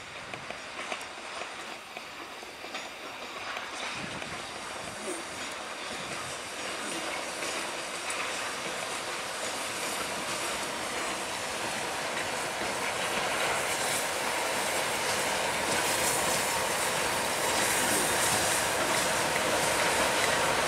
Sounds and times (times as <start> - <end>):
Clickety-clack: 0.0 - 20.6
Railroad car, train wagon: 0.0 - 20.6
Train: 0.0 - 20.6.